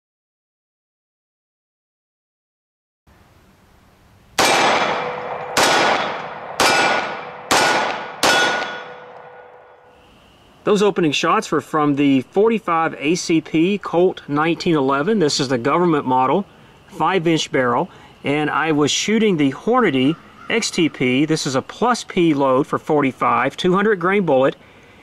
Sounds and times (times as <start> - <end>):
Silence: 8.8 - 10.7.